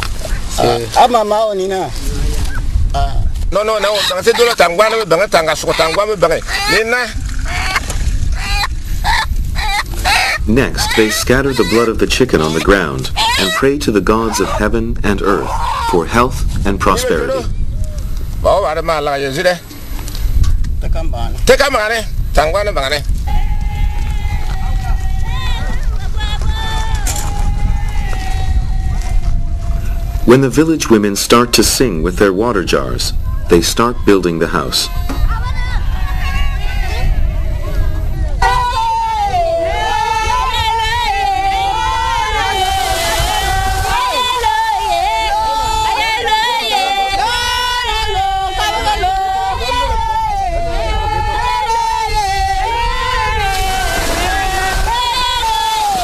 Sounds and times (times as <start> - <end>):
Speech: 10.5 - 17.5.